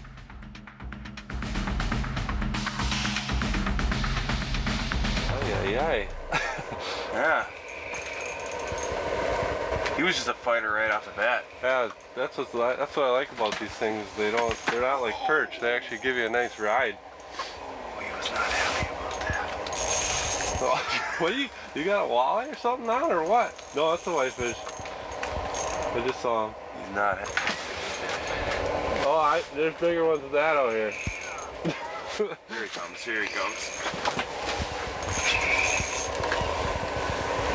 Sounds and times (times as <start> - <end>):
Speech: 5.3 - 6.1, 7.1 - 7.5, 10.0 - 17.0, 17.9 - 19.6, 20.6 - 24.6, 25.9 - 27.4, 29.0 - 33.7.